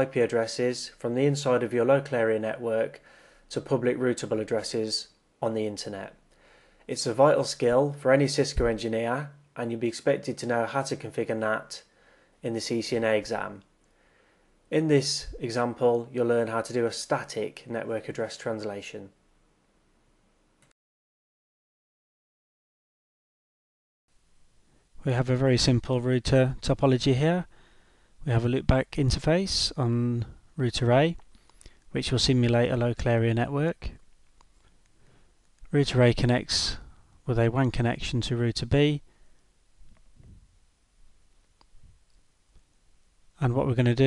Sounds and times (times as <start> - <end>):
Speech: 0.0 - 6.2, 6.9 - 13.7, 14.7 - 19.2, 25.0 - 27.5, 28.2 - 31.2, 31.9 - 34.0, 35.7 - 39.0, 43.4 - 44.0.